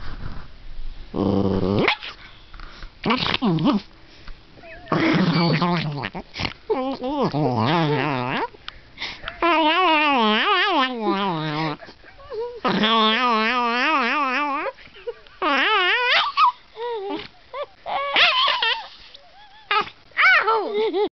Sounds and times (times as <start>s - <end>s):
Dog: 15.5s - 21.1s.